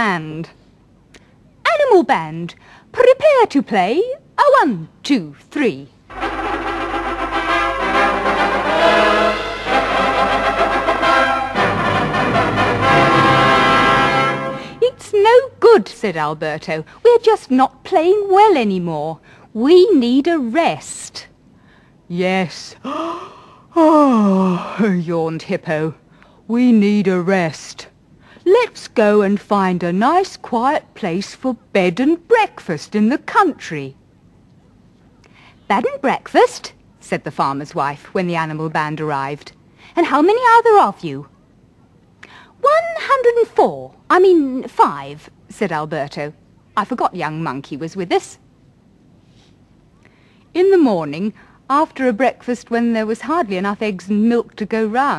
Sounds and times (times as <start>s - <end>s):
Speech: 0.0s - 0.6s, 1.6s - 5.9s, 14.8s - 21.4s, 22.1s - 22.8s, 23.8s - 34.0s, 35.7s - 41.3s, 42.6s - 48.4s, 50.5s - 55.1s.